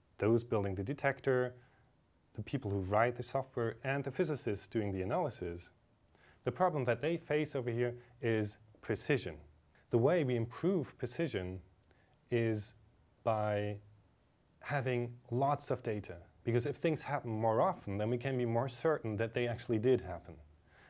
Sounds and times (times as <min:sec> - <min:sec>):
Speech: 0:00.2 - 0:01.6, 0:02.3 - 0:05.8, 0:06.4 - 0:11.7, 0:12.3 - 0:13.9, 0:14.6 - 0:20.5.